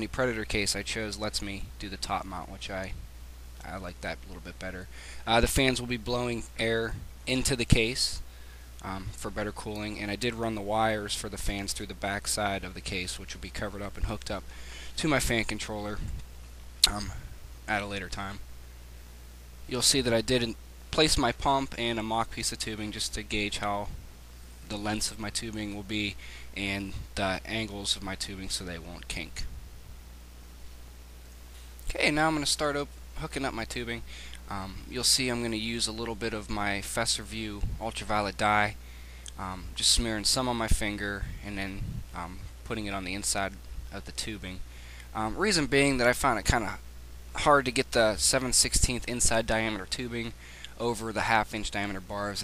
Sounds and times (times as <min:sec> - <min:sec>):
Speech: 0:00.0 - 0:03.0, 0:03.6 - 0:08.2, 0:08.8 - 0:14.4, 0:15.0 - 0:16.2, 0:16.8 - 0:18.4, 0:19.7 - 0:24.0, 0:24.7 - 0:29.5, 0:31.9 - 0:38.8, 0:39.4 - 0:44.6, 0:45.2 - 0:46.8, 0:47.4 - 0:52.4.